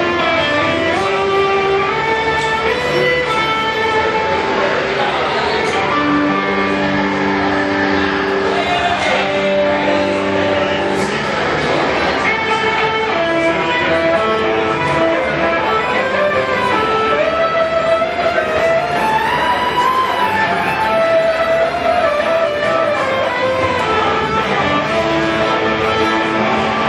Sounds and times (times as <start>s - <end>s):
Violin, fiddle: 0.0s - 26.8s.